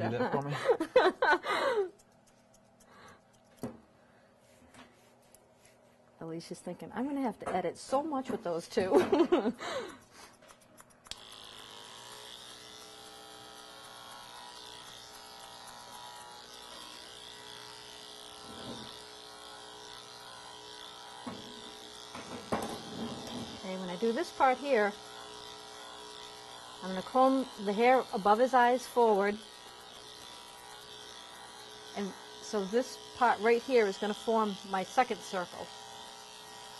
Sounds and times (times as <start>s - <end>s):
Electric shaver, electric razor: 0.0s - 3.8s, 7.0s - 36.7s
Speech: 6.2s - 8.9s, 23.6s - 25.0s, 32.0s - 35.7s.